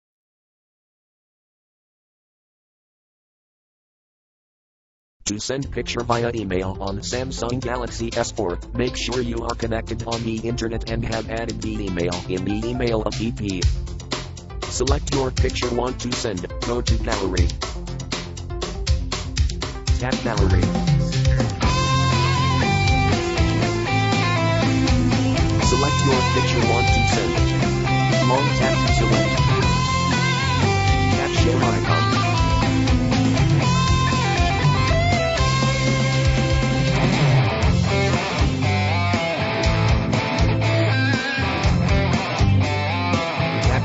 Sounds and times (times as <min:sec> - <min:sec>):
Speech: 0:05.2 - 0:13.7, 0:14.7 - 0:17.6, 0:20.0 - 0:20.7, 0:25.6 - 0:27.6, 0:28.2 - 0:29.6, 0:31.2 - 0:32.2
Music: 0:05.3 - 0:43.8.